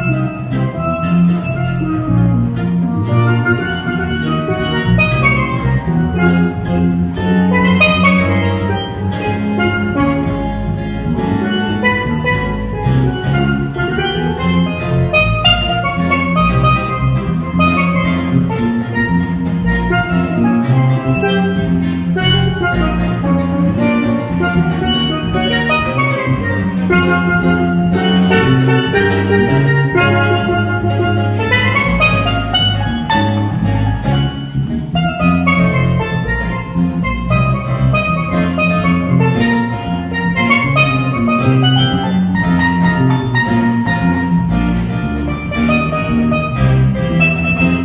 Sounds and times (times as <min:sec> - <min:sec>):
Drum: 0:00.0 - 0:47.8
Steelpan: 0:00.0 - 0:47.8.